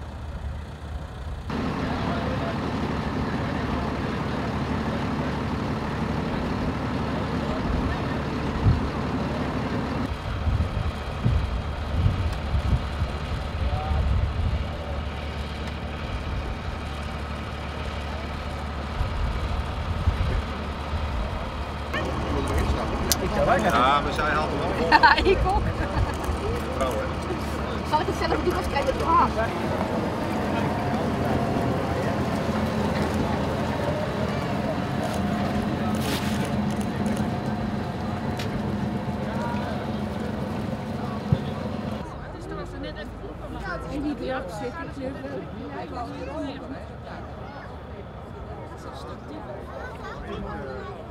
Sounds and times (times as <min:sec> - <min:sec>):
Speech: 0:01.6 - 0:05.6, 0:21.1 - 0:51.1.